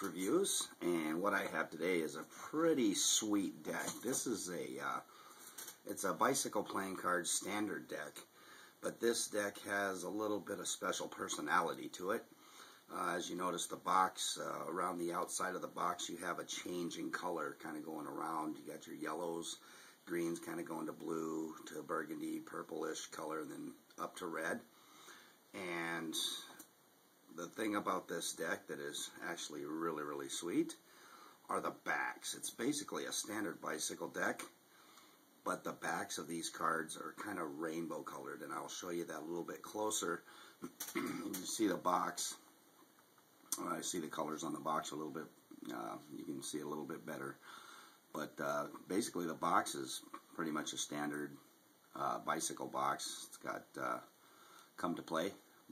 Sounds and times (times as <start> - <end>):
Speech: 0.0 - 5.1, 5.8 - 12.3, 12.9 - 24.7, 25.5 - 26.7, 27.3 - 30.8, 31.5 - 34.6, 35.4 - 42.5, 43.5 - 47.4, 48.1 - 54.1, 54.8 - 55.7.